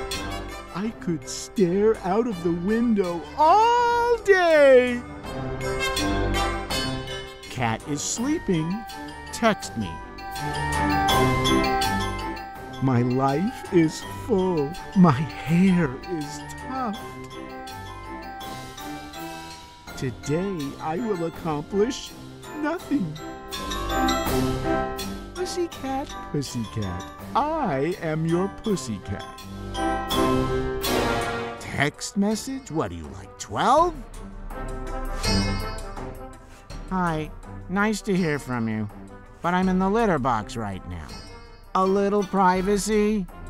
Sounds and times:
Music: 0.0s - 43.5s
Speech: 0.8s - 5.1s, 7.5s - 10.0s, 12.8s - 17.0s, 20.0s - 23.2s, 25.4s - 29.3s, 31.6s - 34.0s, 36.9s - 41.2s, 41.8s - 43.3s.

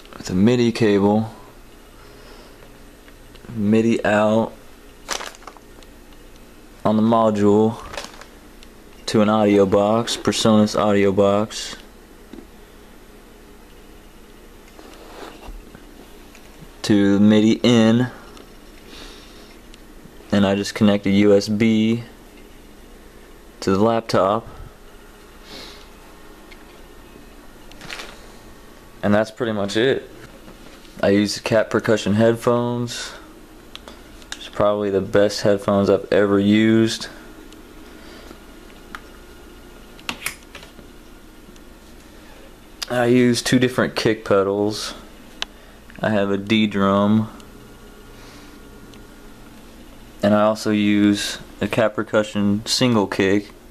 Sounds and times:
Speech: 0.2s - 1.5s, 3.4s - 4.6s, 6.8s - 8.0s, 9.0s - 11.9s, 16.8s - 18.2s, 20.3s - 22.2s, 23.6s - 24.7s, 29.0s - 30.1s, 31.0s - 33.3s, 34.4s - 37.2s, 42.8s - 45.1s, 46.0s - 47.4s, 50.2s - 53.6s.

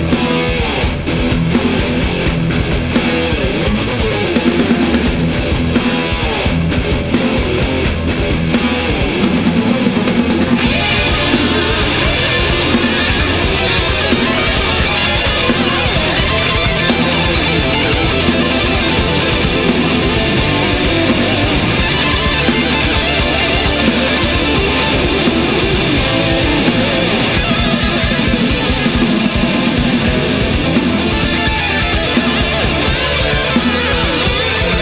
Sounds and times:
Heavy metal: 0.0s - 34.8s.

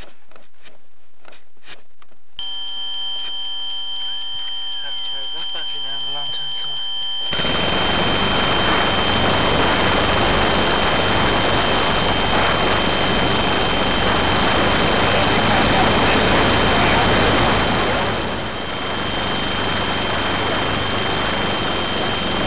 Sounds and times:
Speech: 4.8s - 6.8s, 15.1s - 17.5s.

